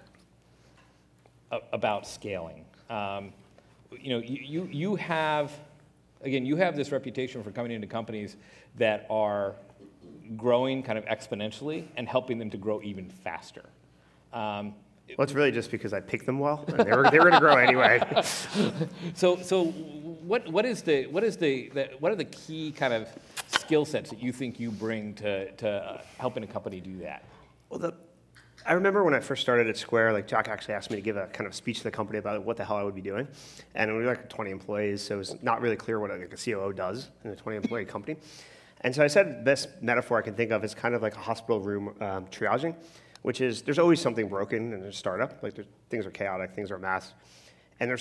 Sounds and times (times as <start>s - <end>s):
Speech: 1.5s - 13.8s, 14.4s - 18.1s, 19.2s - 28.0s, 28.6s - 38.2s, 38.8s - 47.2s, 47.8s - 48.0s.